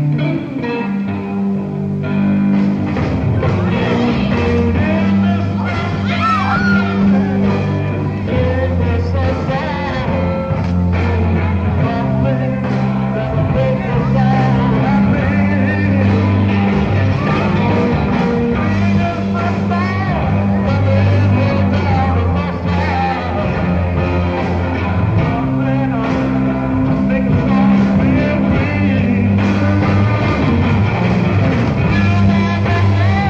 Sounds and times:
Guitar: 0.0s - 33.2s
Psychedelic rock: 0.0s - 33.2s.

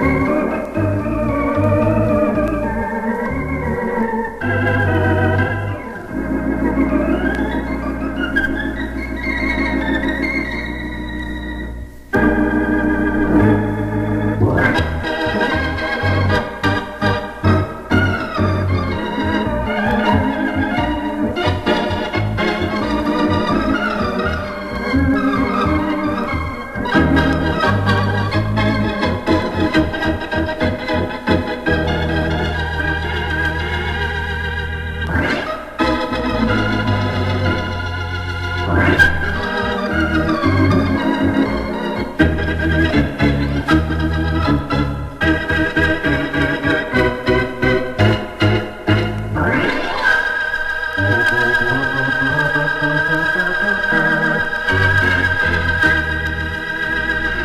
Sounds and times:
Hammond organ: 0.0s - 57.4s.

